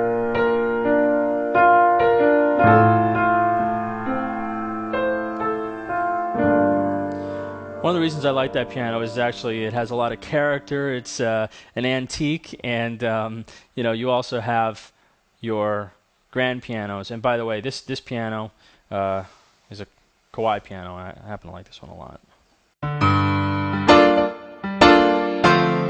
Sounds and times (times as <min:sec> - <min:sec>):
Speech: 0:07.8 - 0:22.2.